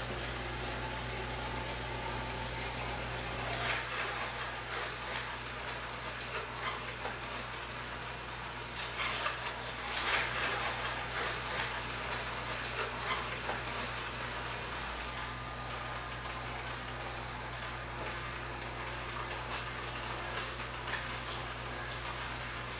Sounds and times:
Blender: 2.6 - 17.2.

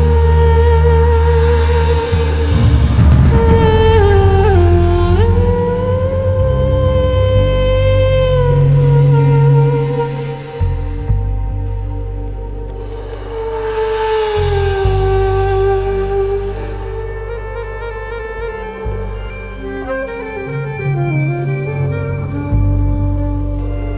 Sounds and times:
Music: 0.0 - 23.9.

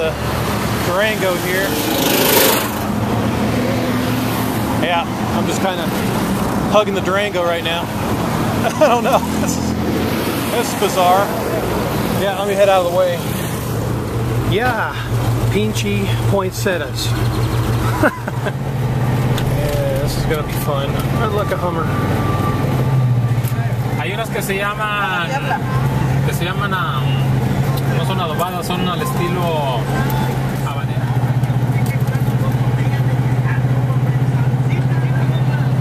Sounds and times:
Car: 0.0 - 35.8
Outside, urban or manmade: 0.0 - 35.8
Speech: 0.8 - 1.7, 14.5 - 17.2, 19.6 - 21.9, 27.9 - 35.8.

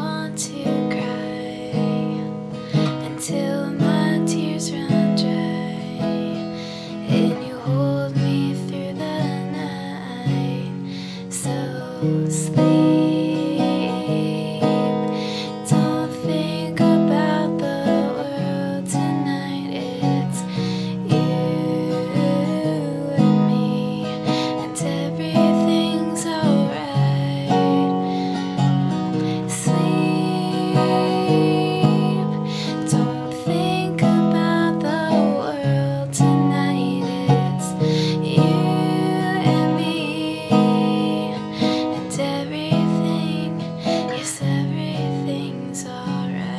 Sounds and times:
Guitar: 0.0 - 46.5.

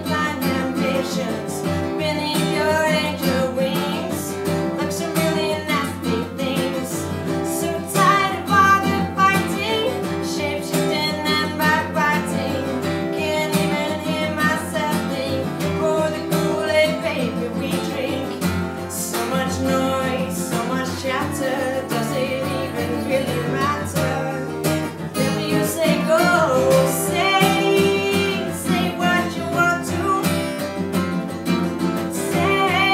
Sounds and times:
Music: 0.0 - 32.9.

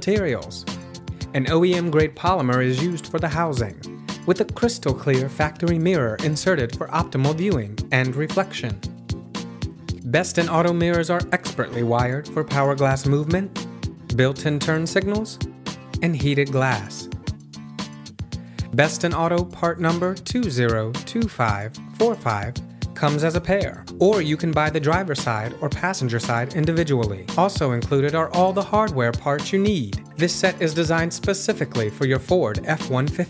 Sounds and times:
Speech: 0.0 - 0.7, 1.3 - 8.9, 10.0 - 17.2, 18.7 - 33.3
Music: 0.0 - 33.3.

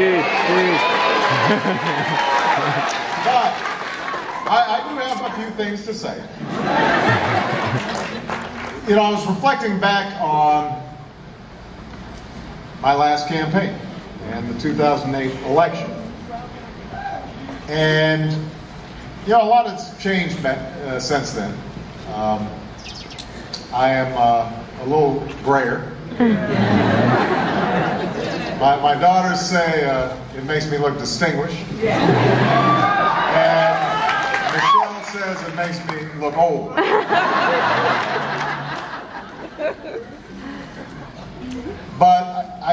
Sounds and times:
Male speech, man speaking: 4.5 - 6.3, 8.9 - 10.9, 12.8 - 16.0, 17.7 - 18.5, 19.3 - 22.6, 23.7 - 25.9, 28.6 - 31.7, 34.5 - 36.8, 42.0 - 42.7
Narration, monologue: 17.6 - 26.1.

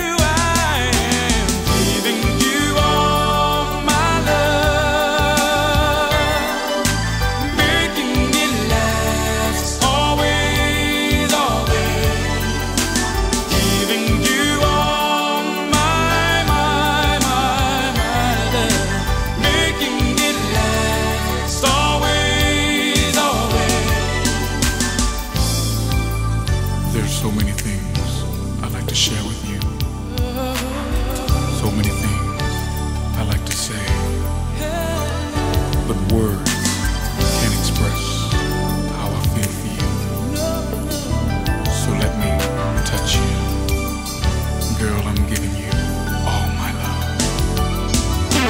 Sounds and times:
Pop music: 0.0 - 48.5.

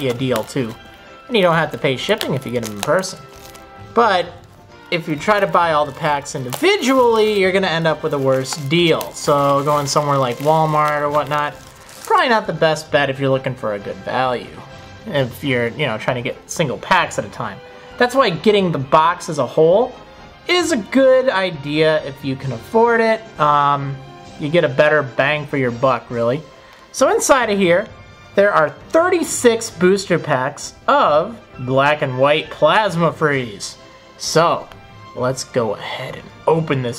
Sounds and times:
Speech: 0.0 - 3.2, 4.0 - 36.9
Music: 0.0 - 36.9.

